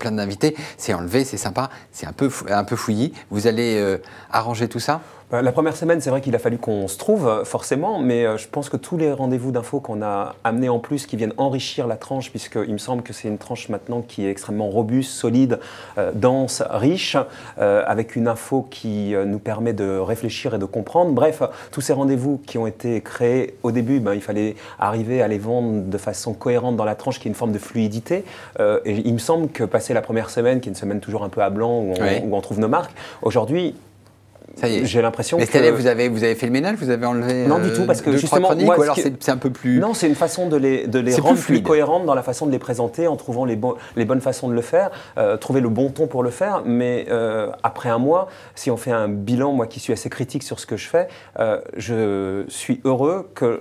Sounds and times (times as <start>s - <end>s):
Speech: 0.0s - 33.8s, 34.6s - 53.6s.